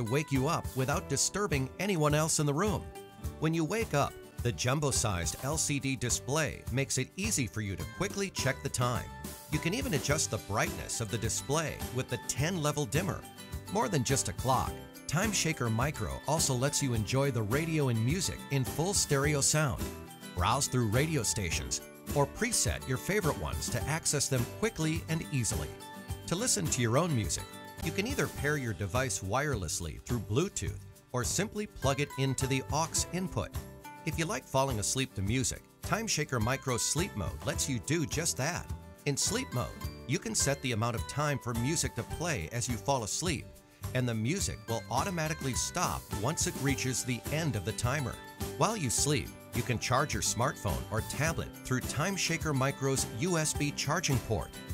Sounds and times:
Speech: 0.0s - 54.6s
Music: 0.0s - 54.7s.

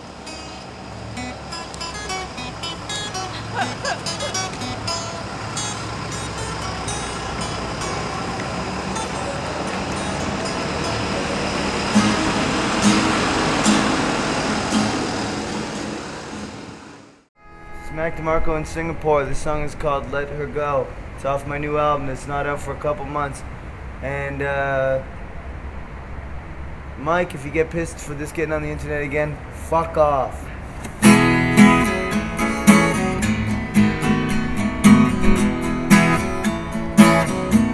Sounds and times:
Music: 0.2s - 15.1s, 17.4s - 18.8s, 31.0s - 37.7s
Speech: 17.8s - 25.1s, 27.0s - 30.5s.

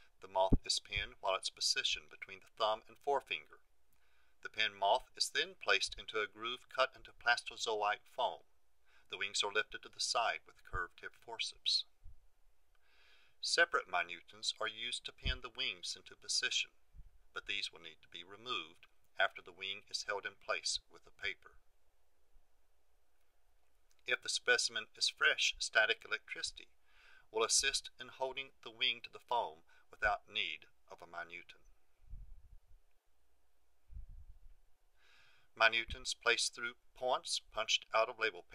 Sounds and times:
Speech: 0.2s - 3.6s, 4.4s - 8.5s, 9.1s - 11.9s, 13.4s - 16.7s, 17.4s - 21.6s, 24.1s - 26.7s, 27.4s - 31.6s, 35.6s - 38.5s.

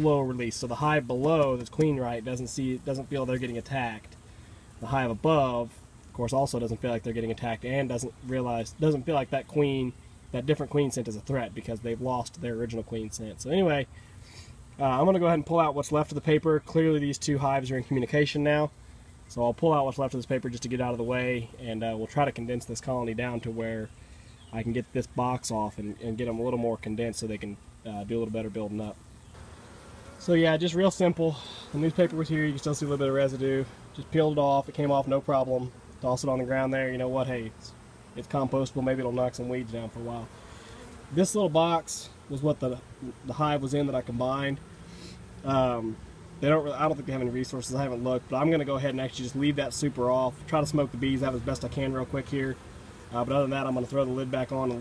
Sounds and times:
Speech: 0.0s - 4.2s, 4.8s - 13.9s, 14.8s - 29.0s, 30.2s - 40.3s, 41.1s - 44.6s, 45.4s - 54.8s
Outside, rural or natural: 0.0s - 54.8s.

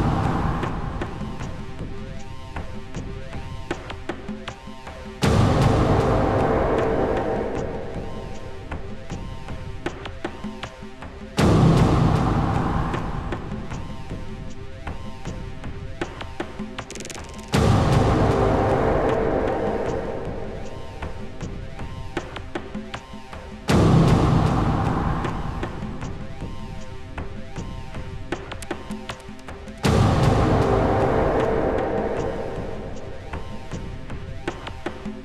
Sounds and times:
Music: 0.0s - 35.2s.

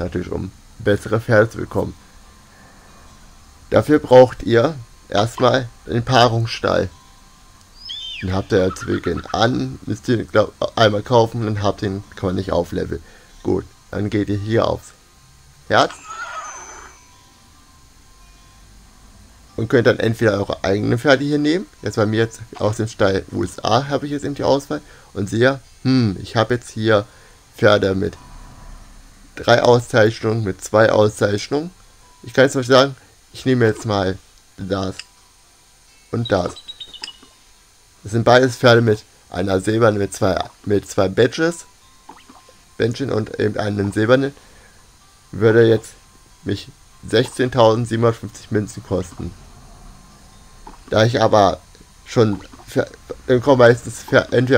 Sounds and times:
Speech: 0.0s - 2.0s, 3.7s - 6.9s, 8.2s - 15.0s, 15.7s - 16.0s, 19.6s - 28.2s, 29.4s - 31.7s, 32.3s - 35.0s, 36.2s - 36.6s, 38.0s - 41.6s, 42.8s - 44.4s, 45.4s - 49.4s, 50.9s - 54.5s
Music: 0.0s - 54.5s
Neigh, whinny: 15.9s - 17.1s.

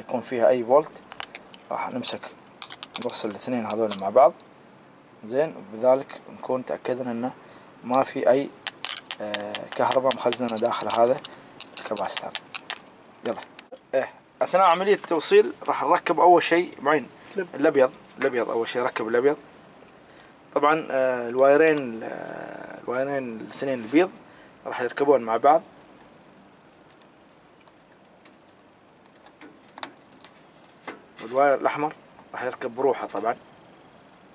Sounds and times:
Speech: 0.0s - 1.0s, 1.7s - 2.3s, 3.0s - 4.4s, 5.2s - 8.5s, 9.2s - 11.2s, 13.2s - 19.4s, 20.6s - 25.7s, 31.2s - 33.4s.

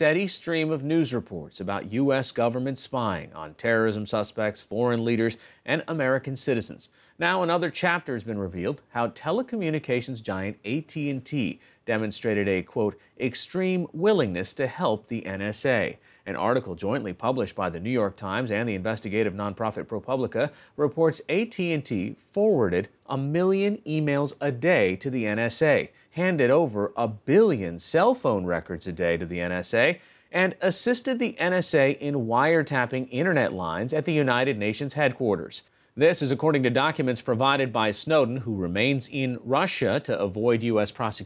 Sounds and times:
Speech: 0.0s - 41.2s.

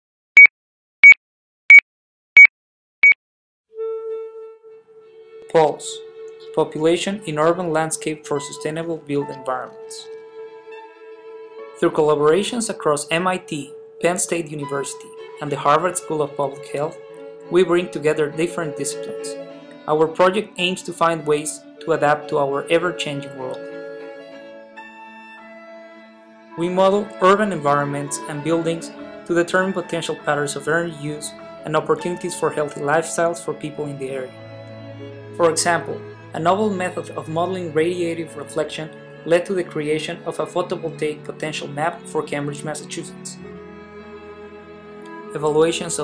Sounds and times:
Music: 3.7s - 46.0s
Speech: 5.5s - 6.0s, 6.6s - 10.1s, 11.8s - 23.6s, 26.6s - 34.3s, 35.4s - 43.4s, 45.4s - 46.0s.

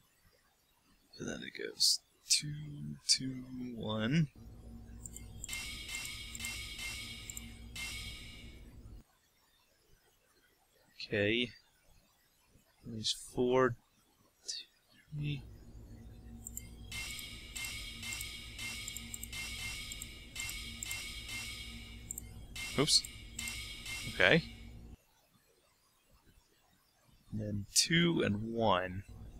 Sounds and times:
Speech: 1.2s - 4.3s, 11.0s - 11.6s, 12.9s - 13.8s, 14.5s - 15.4s, 24.1s - 24.5s, 27.4s - 29.0s.

